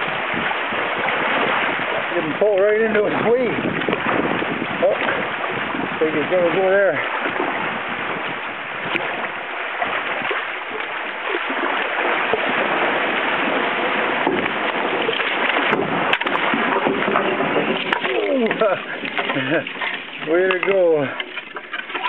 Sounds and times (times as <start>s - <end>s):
Boat, Water vehicle: 0.0s - 22.0s
Splash, splatter: 0.0s - 22.0s.